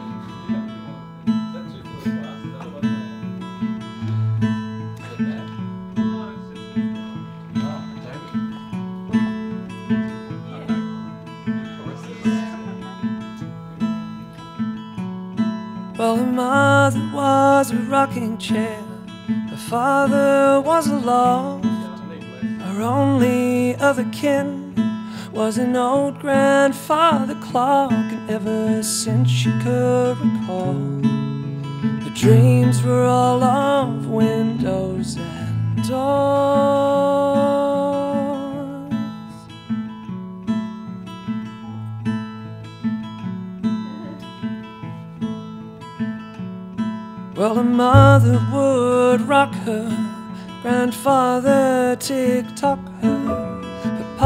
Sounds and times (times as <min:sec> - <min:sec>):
Music: 0:00.0 - 0:54.2.